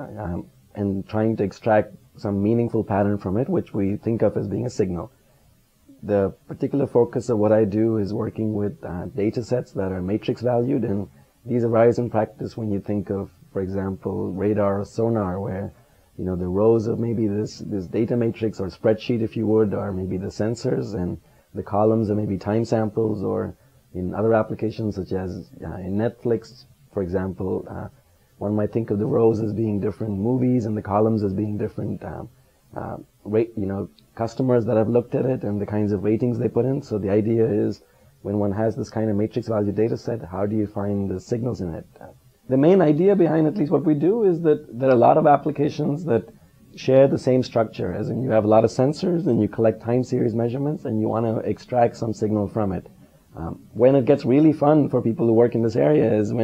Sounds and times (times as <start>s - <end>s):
Speech: 0.0s - 5.1s, 5.9s - 56.4s.